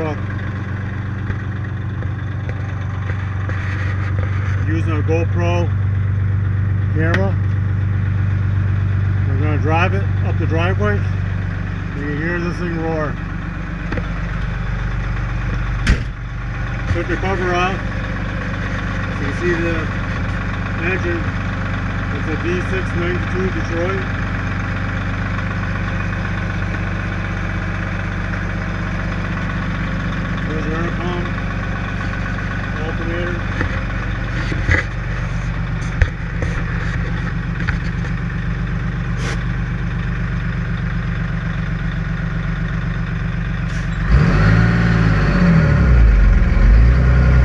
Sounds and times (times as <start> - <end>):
Speech: 0.0 - 0.2, 4.6 - 5.7, 6.9 - 7.4, 9.3 - 11.1, 11.9 - 13.2, 16.9 - 17.9, 19.2 - 20.0, 20.8 - 21.3, 22.1 - 24.1, 30.4 - 31.3, 32.7 - 33.5
Vehicle: 0.0 - 47.4.